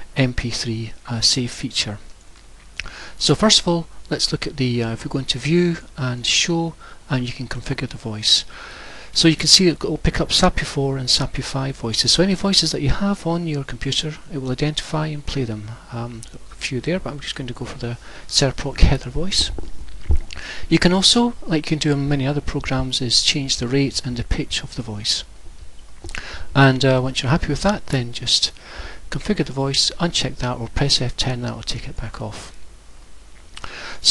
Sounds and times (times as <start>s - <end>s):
Speech: 0.2s - 2.1s, 3.2s - 8.5s, 9.2s - 19.6s, 20.7s - 25.3s, 26.6s - 32.6s.